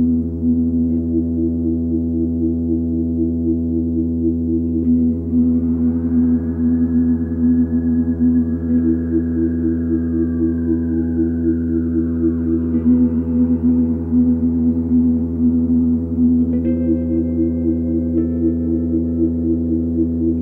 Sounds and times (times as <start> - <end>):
Ambient music: 0.0 - 20.4.